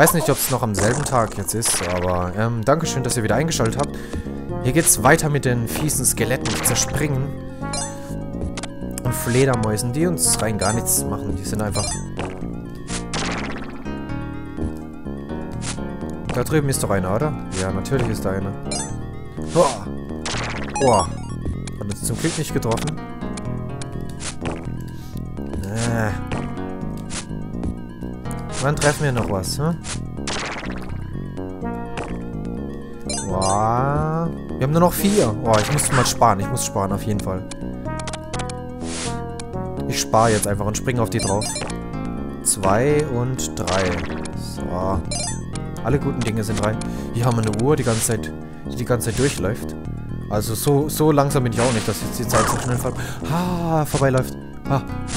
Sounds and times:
Speech: 0.0s - 3.9s, 4.6s - 7.3s, 9.2s - 12.0s, 16.4s - 18.6s, 19.6s - 19.9s, 20.8s - 21.2s, 21.8s - 23.0s, 25.6s - 26.2s, 28.6s - 29.8s, 33.3s - 37.4s, 39.9s - 41.5s, 42.5s - 45.1s, 45.8s - 49.7s, 50.3s - 54.8s
Music: 0.0s - 55.1s.

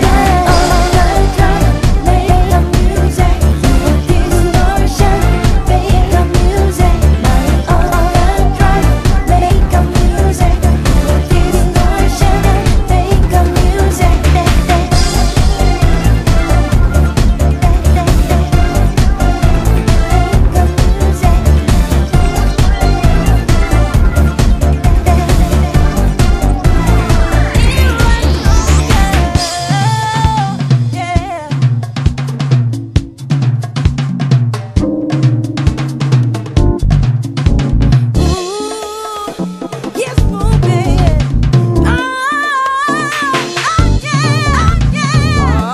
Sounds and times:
Music: 0.0s - 45.7s.

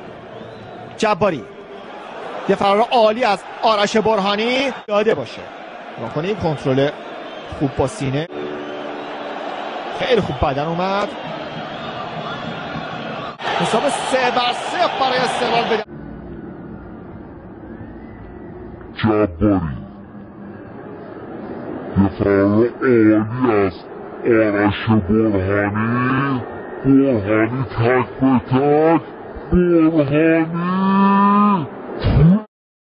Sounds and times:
Speech: 2.5s - 8.3s, 10.0s - 11.1s, 13.6s - 15.9s, 19.0s - 19.8s, 22.0s - 30.8s.

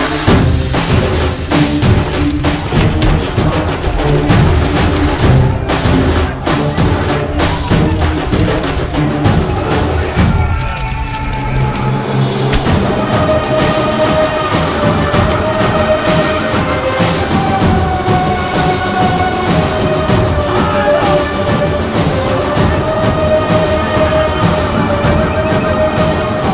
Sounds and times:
Music: 0.0s - 26.5s.

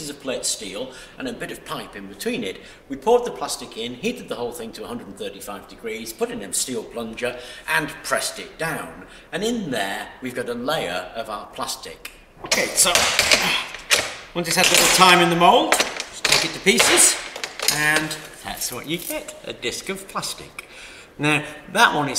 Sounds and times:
Speech: 0.0s - 13.7s, 14.4s - 20.6s, 21.2s - 22.1s
Inside, small room: 0.0s - 22.1s.

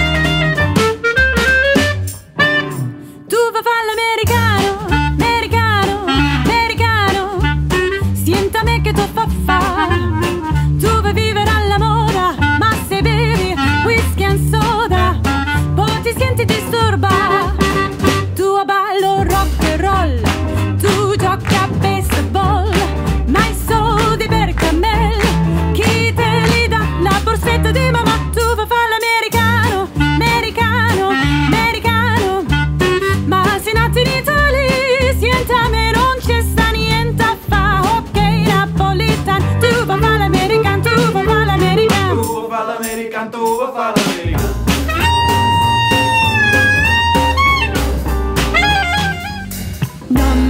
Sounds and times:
Jazz: 0.0s - 50.4s
Swing music: 0.0s - 50.4s.

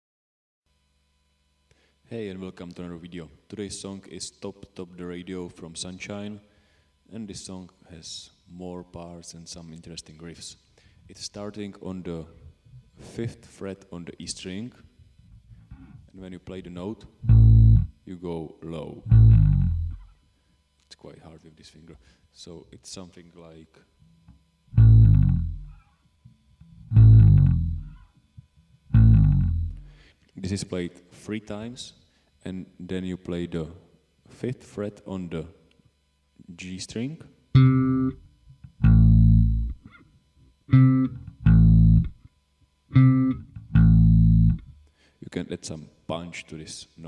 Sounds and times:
Inside, small room: 0.7s - 47.0s
Speech: 2.0s - 6.5s, 7.1s - 14.9s, 15.8s - 17.2s, 18.0s - 19.1s, 20.8s - 23.9s, 30.4s - 35.7s, 36.4s - 37.4s, 45.2s - 47.0s
Bass guitar: 17.2s - 18.0s, 19.0s - 20.2s, 24.1s - 30.0s, 37.6s - 40.0s, 40.7s - 42.3s, 42.9s - 44.8s
Electronic tuner: 17.2s - 18.0s, 19.0s - 20.2s, 24.0s - 30.1s, 37.5s - 44.8s.

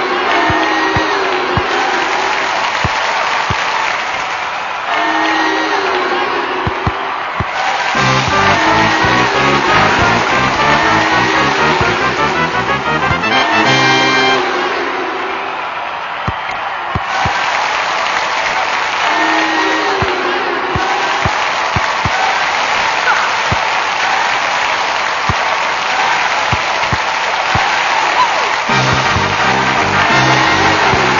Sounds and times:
Music: 8.0s - 14.6s, 28.7s - 31.1s.

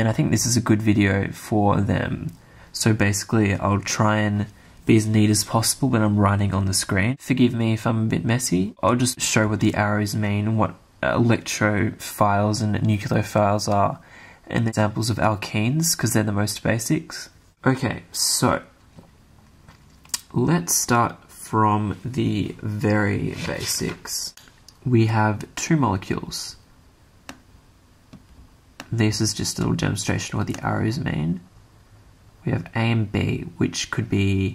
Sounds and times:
Speech: 0.0s - 18.8s, 20.1s - 26.7s, 28.8s - 31.5s, 32.4s - 34.5s.

